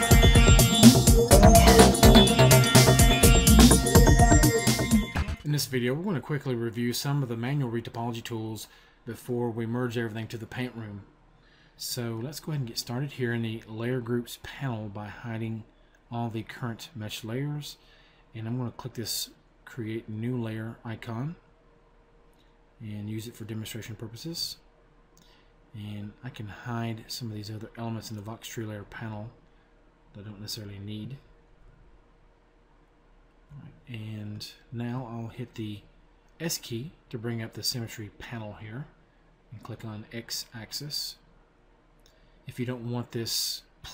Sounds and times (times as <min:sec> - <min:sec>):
Speech: 0:05.4 - 0:11.1, 0:11.8 - 0:17.8, 0:18.4 - 0:21.4, 0:22.8 - 0:24.7, 0:25.7 - 0:29.4, 0:30.1 - 0:31.3, 0:33.5 - 0:41.3, 0:42.5 - 0:43.9.